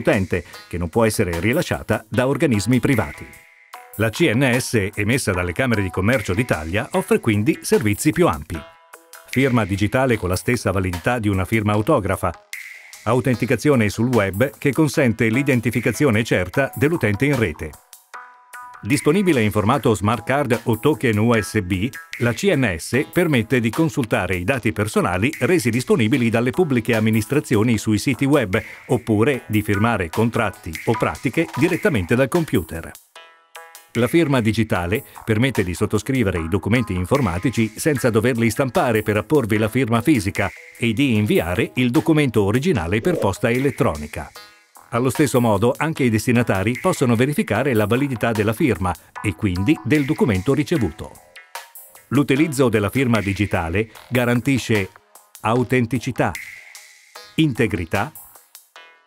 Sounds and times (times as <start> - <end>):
Speech: 0.0 - 3.4, 4.0 - 8.7, 9.4 - 12.4, 13.1 - 17.8, 18.9 - 33.0, 34.0 - 51.2, 52.1 - 56.4, 57.4 - 58.2
Music: 0.0 - 59.0.